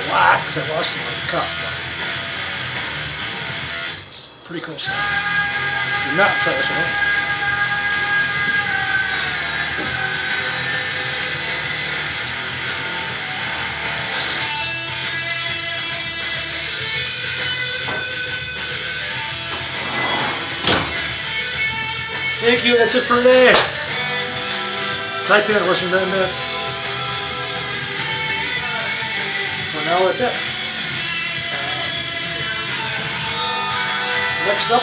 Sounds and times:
Speech: 0:00.0 - 0:01.8, 0:04.5 - 0:05.0, 0:06.0 - 0:07.0, 0:22.4 - 0:23.7, 0:25.3 - 0:26.3, 0:29.7 - 0:30.4, 0:34.4 - 0:34.8
Music: 0:00.0 - 0:34.8.

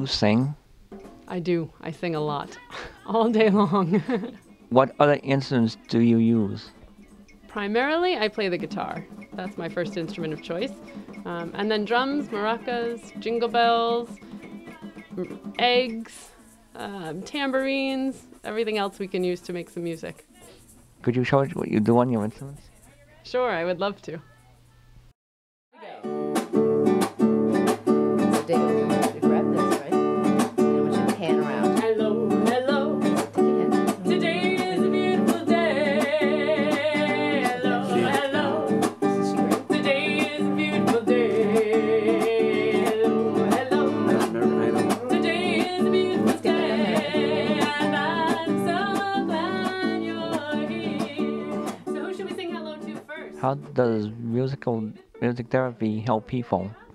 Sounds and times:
Music: 0:00.0 - 0:25.1, 0:25.8 - 0:56.9.

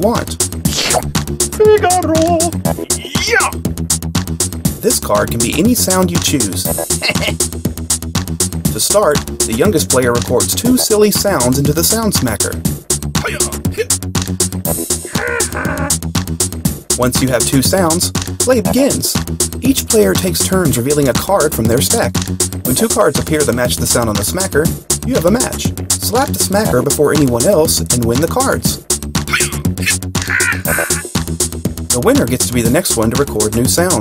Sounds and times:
Speech: 0:00.0 - 0:00.4, 0:01.6 - 0:03.6, 0:04.8 - 0:06.7, 0:08.7 - 0:12.6, 0:13.2 - 0:13.9, 0:17.0 - 0:22.1, 0:22.7 - 0:29.6, 0:31.9 - 0:34.0
Music: 0:00.0 - 0:34.0.

